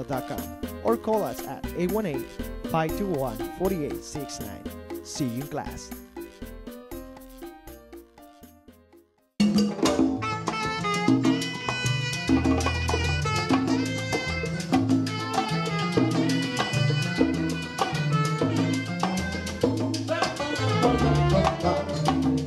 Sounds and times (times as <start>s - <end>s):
Salsa music: 0.0s - 22.4s.